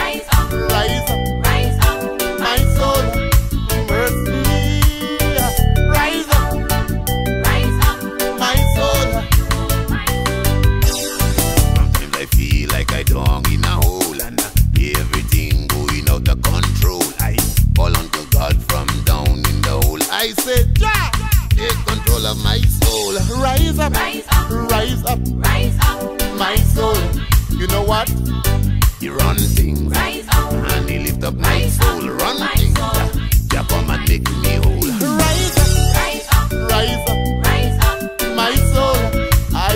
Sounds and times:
Music of Africa: 0.0 - 39.7.

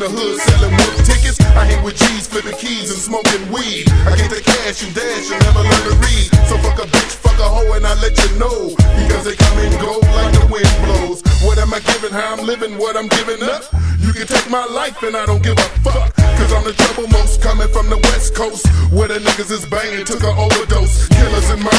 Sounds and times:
Music: 0.0 - 21.7.

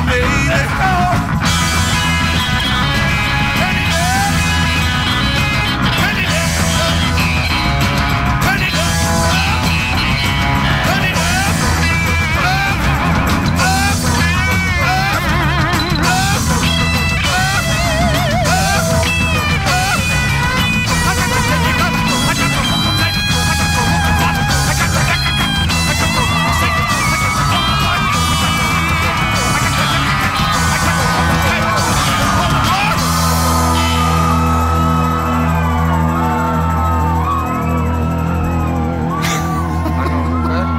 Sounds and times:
Music: 0.0 - 40.7.

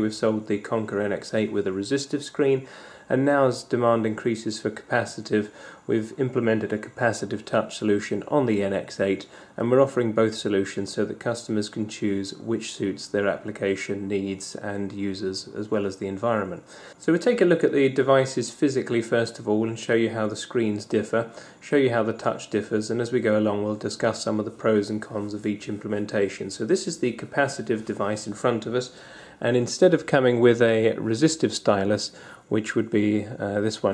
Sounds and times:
Speech: 0.0 - 33.9.

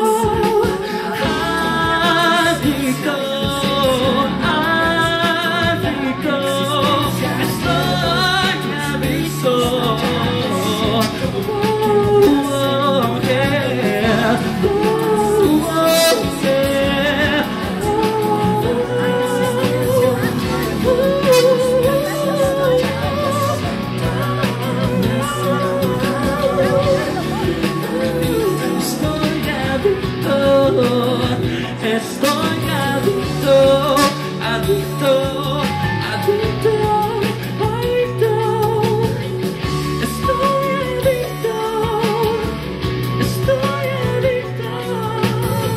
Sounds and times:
Music: 0.0 - 45.7
Singing: 0.0 - 45.7.

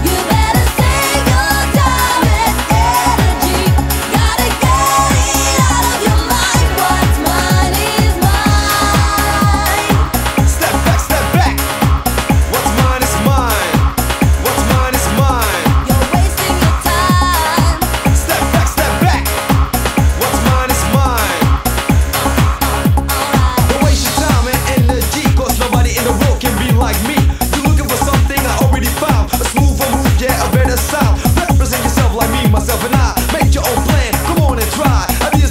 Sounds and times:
Dance music: 0.0 - 35.5.

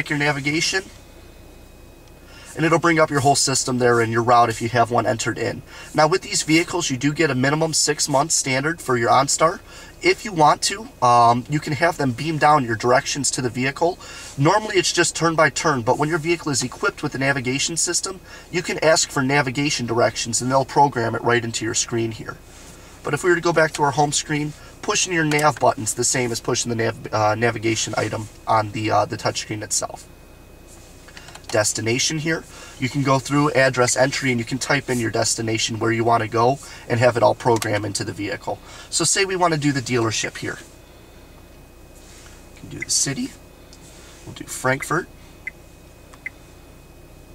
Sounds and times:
Speech: 0.0 - 1.0, 2.5 - 22.4, 23.0 - 30.1, 31.5 - 40.7, 42.6 - 43.4, 44.3 - 45.1.

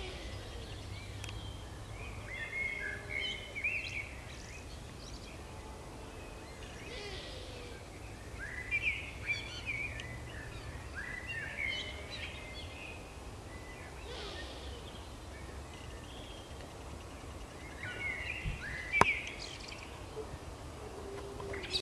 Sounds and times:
Bird: 0.0 - 21.8.

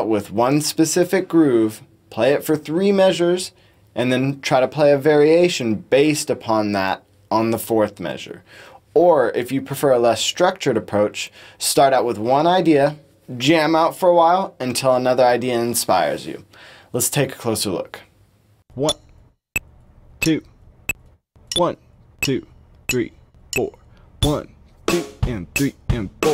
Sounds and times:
Speech: 0.0 - 18.1, 18.8 - 19.0, 20.2 - 20.5, 21.6 - 24.5, 25.2 - 26.3.

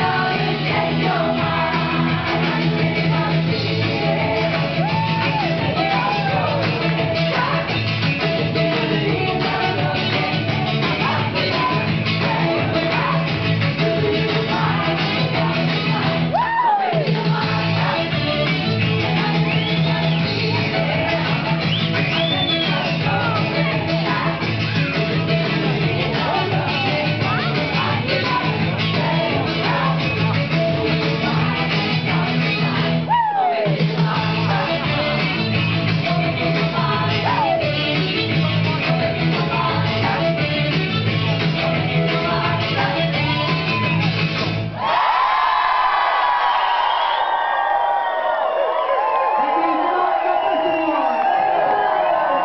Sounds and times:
Singing: 0.0 - 44.3
Music: 0.0 - 44.8.

